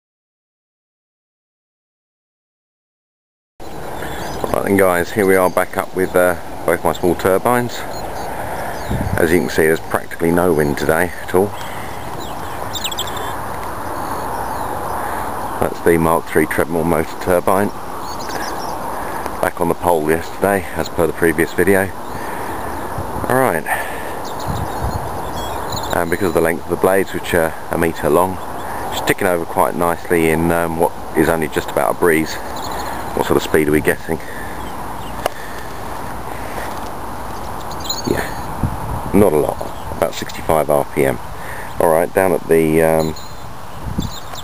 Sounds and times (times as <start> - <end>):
Speech: 4.4 - 7.9, 9.1 - 11.6, 15.6 - 17.8, 19.4 - 22.0, 23.2 - 23.8, 25.9 - 32.4, 33.2 - 34.3, 38.0 - 38.4, 39.1 - 41.2, 41.8 - 43.2.